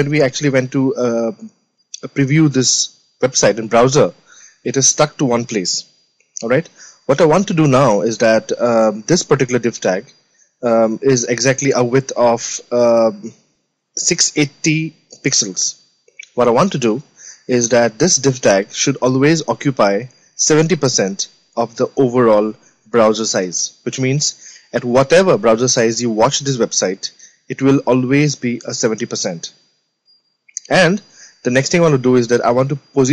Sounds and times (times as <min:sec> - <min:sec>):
Speech: 0:00.0 - 0:05.8, 0:06.4 - 0:13.3, 0:14.0 - 0:29.5, 0:30.6 - 0:33.1.